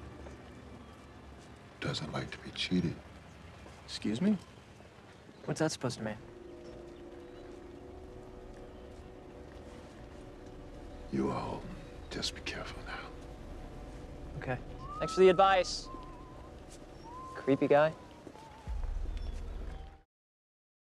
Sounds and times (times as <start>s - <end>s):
Music: 5.5s - 20.1s.